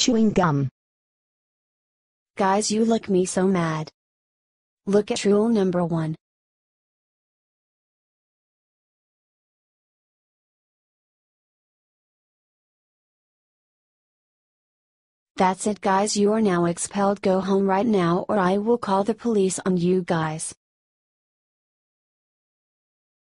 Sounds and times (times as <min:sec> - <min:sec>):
Speech: 0:00.0 - 0:00.7, 0:02.4 - 0:04.0, 0:04.9 - 0:06.2, 0:15.4 - 0:20.6.